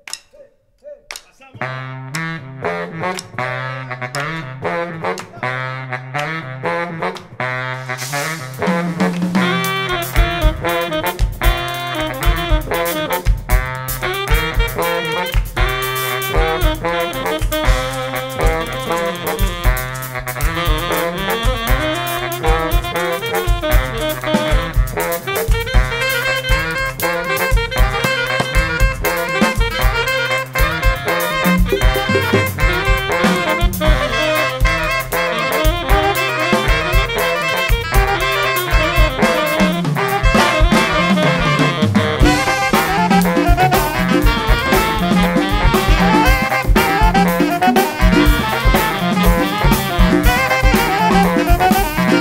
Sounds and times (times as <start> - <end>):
Saxophone: 0.0 - 52.2
Brass instrument: 1.2 - 52.2.